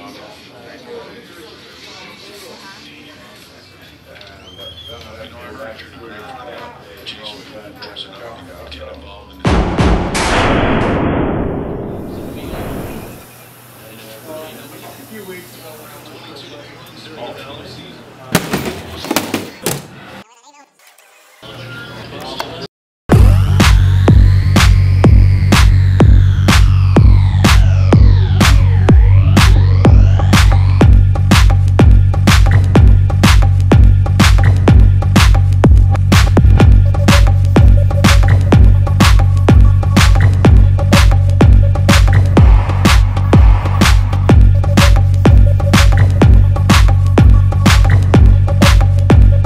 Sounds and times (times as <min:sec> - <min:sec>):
Music: 0:09.4 - 0:10.6, 0:23.1 - 0:49.4.